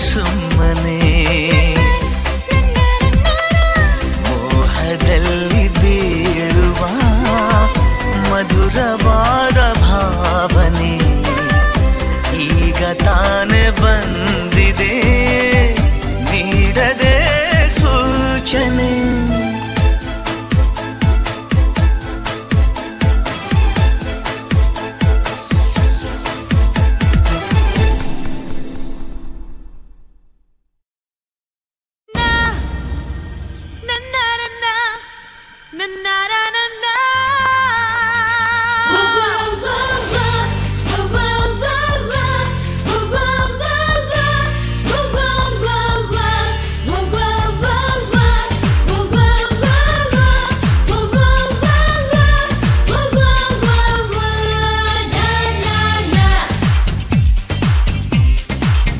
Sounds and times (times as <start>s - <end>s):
Singing: 0.0s - 19.7s, 35.8s - 56.9s
Music of Asia: 0.0s - 28.7s, 38.7s - 58.9s.